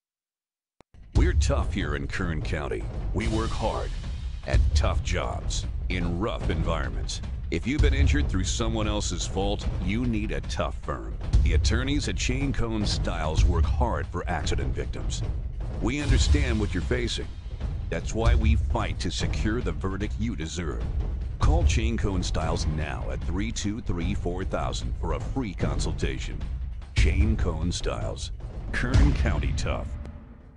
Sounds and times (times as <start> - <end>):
Music: 0.9 - 30.5
Speech: 1.2 - 15.2, 15.8 - 17.3, 17.9 - 26.4, 27.0 - 30.0.